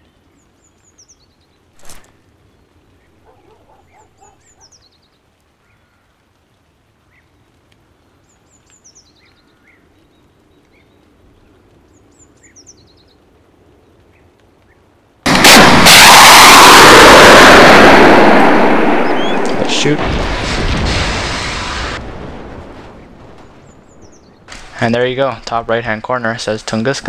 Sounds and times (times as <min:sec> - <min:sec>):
Explosion: 0:15.3 - 0:24.8.